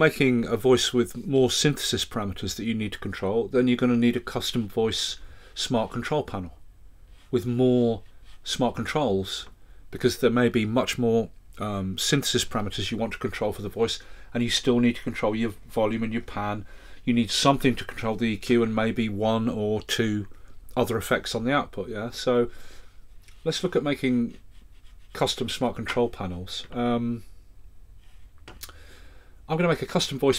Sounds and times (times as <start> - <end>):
Speech: 0.0 - 6.6, 7.3 - 22.6, 23.3 - 24.4, 25.1 - 27.3, 29.5 - 30.3.